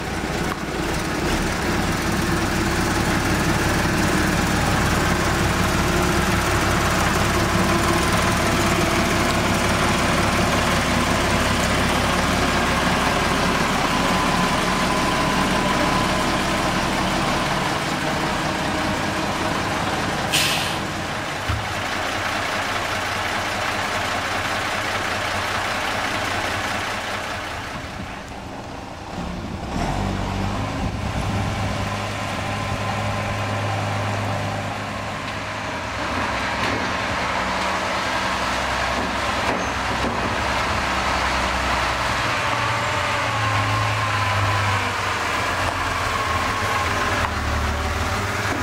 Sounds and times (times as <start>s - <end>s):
Heavy engine (low frequency): 0.0s - 48.6s
Truck: 0.0s - 48.6s.